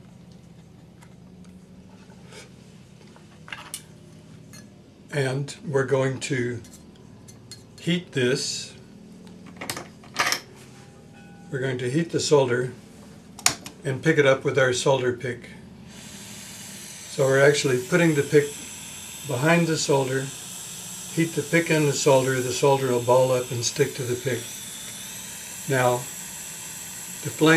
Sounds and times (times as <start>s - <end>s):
Speech: 5.1s - 6.7s, 7.8s - 8.8s, 11.5s - 12.8s, 13.8s - 15.6s, 17.2s - 18.6s, 19.3s - 20.4s, 21.2s - 24.5s, 25.7s - 26.1s, 27.2s - 27.5s.